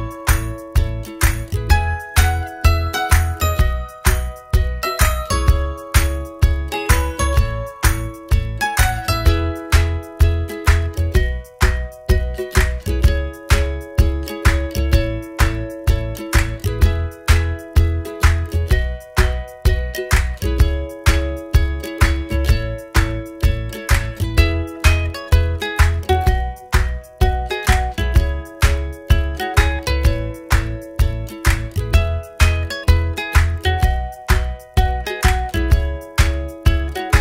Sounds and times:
Background music: 0.0s - 37.2s
Happy music: 0.0s - 37.2s.

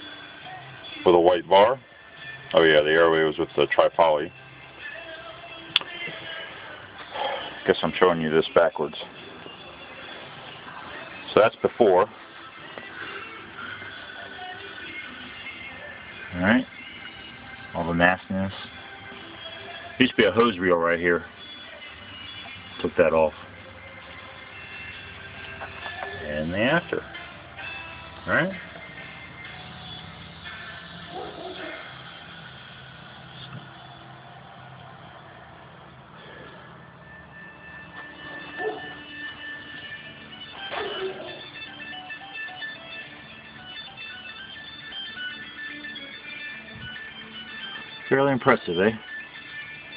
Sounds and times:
Music: 0.0s - 49.9s.

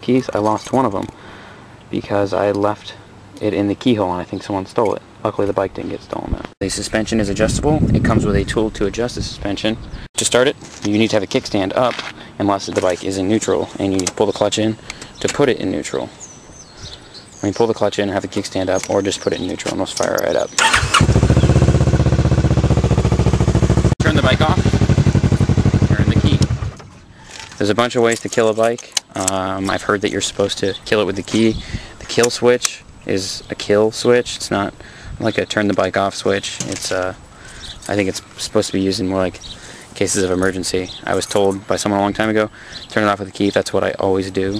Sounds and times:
Speech: 0.0s - 1.2s, 1.9s - 16.2s, 17.4s - 20.6s, 24.0s - 24.8s, 25.7s - 26.6s, 27.6s - 37.2s, 37.8s - 44.5s
Motorcycle: 20.6s - 27.1s.

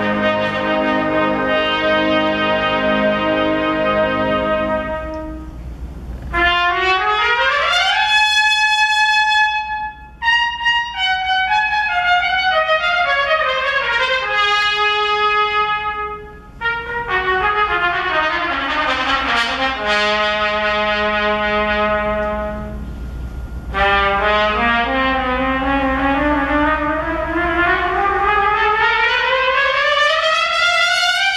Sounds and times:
Trumpet: 0.0s - 31.3s.

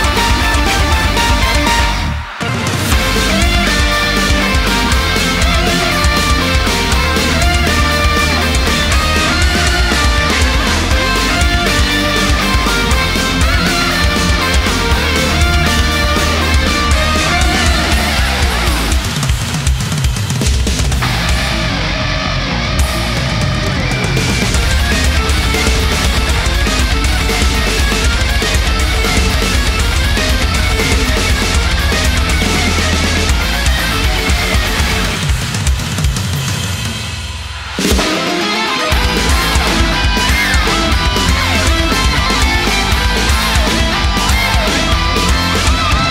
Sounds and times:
Angry music: 0.0s - 46.1s.

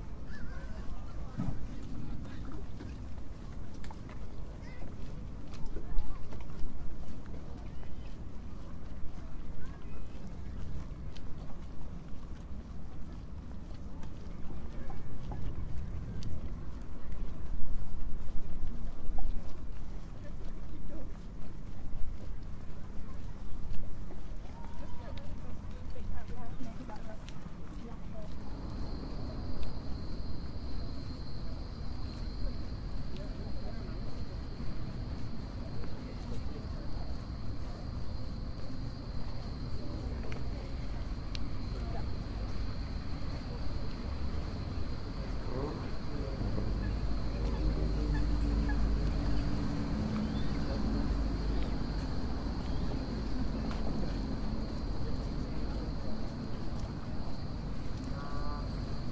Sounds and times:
Walk, footsteps: 0.0s - 59.1s
Speech: 0.3s - 11.7s, 13.9s - 17.6s, 19.8s - 30.2s, 30.8s - 51.9s, 52.6s - 59.1s.

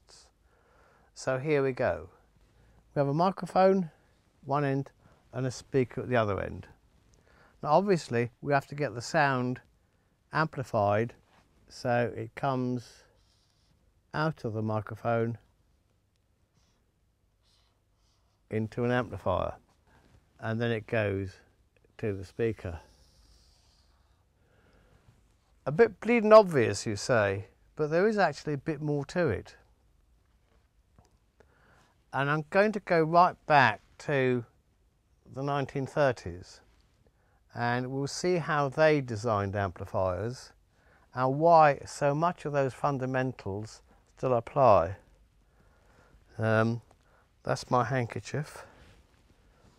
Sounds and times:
Speech: 0.0s - 0.3s, 1.2s - 2.2s, 2.9s - 6.8s, 7.6s - 9.7s, 10.3s - 13.1s, 14.1s - 15.4s, 18.5s - 19.6s, 20.4s - 22.9s, 25.6s - 29.6s, 32.1s - 34.5s, 35.3s - 36.7s, 37.5s - 45.0s, 46.3s - 48.8s.

